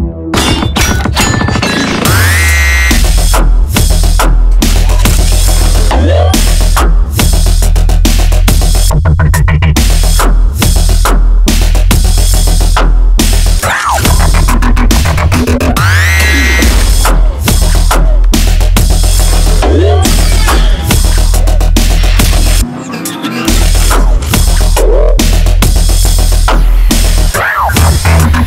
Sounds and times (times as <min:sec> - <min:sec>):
Music: 0:00.0 - 0:28.4.